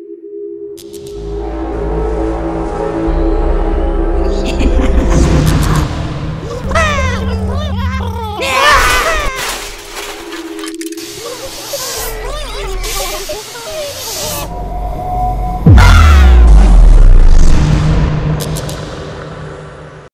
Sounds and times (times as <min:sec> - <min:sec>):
Music: 0:00.0 - 0:12.2, 0:14.2 - 0:20.1.